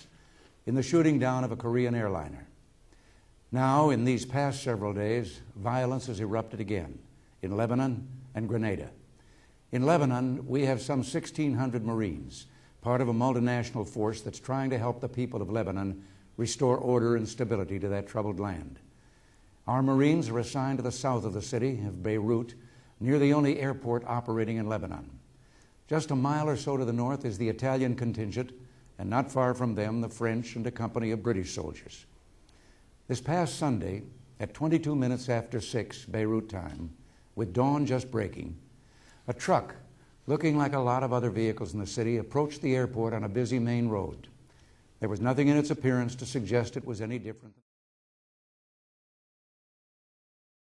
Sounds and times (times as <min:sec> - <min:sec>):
Narration, monologue: 0:00.0 - 0:47.7
Male speech, man speaking: 0:00.7 - 0:02.5, 0:03.5 - 0:09.0, 0:09.7 - 0:18.8, 0:19.7 - 0:25.2, 0:25.9 - 0:32.1, 0:33.1 - 0:38.6, 0:39.3 - 0:44.3, 0:45.0 - 0:47.6.